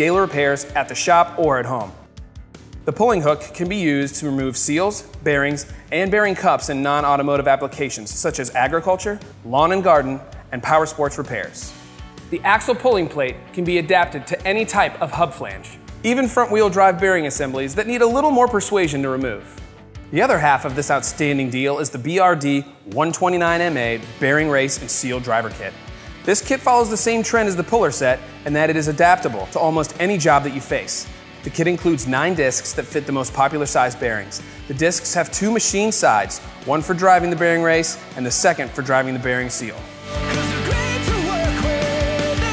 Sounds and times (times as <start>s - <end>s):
Speech: 0.0s - 2.0s, 2.9s - 39.9s
Music: 0.0s - 42.5s.